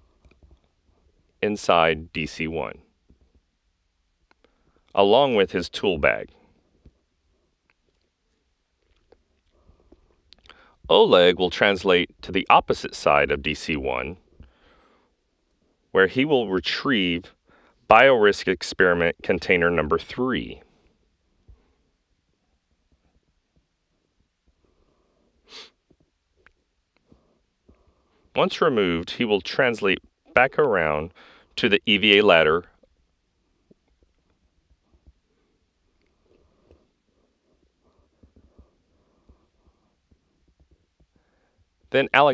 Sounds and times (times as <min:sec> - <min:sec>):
Speech: 0:01.4 - 0:02.8, 0:05.0 - 0:06.3, 0:10.9 - 0:14.2, 0:16.0 - 0:20.6, 0:28.4 - 0:32.7, 0:42.0 - 0:42.3.